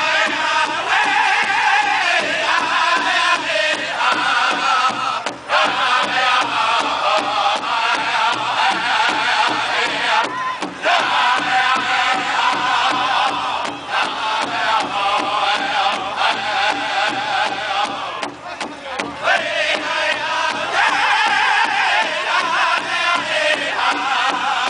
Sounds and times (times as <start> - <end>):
Music: 0.0 - 24.6.